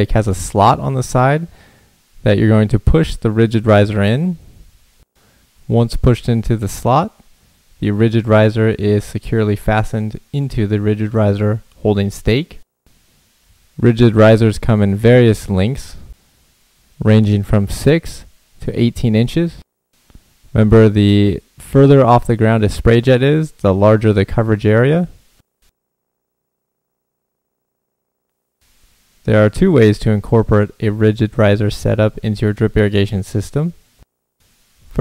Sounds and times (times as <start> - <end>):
Speech: 0.0 - 1.5, 2.2 - 4.4, 5.7 - 7.2, 7.8 - 12.6, 13.8 - 16.1, 17.0 - 19.6, 20.5 - 25.2, 29.3 - 33.8.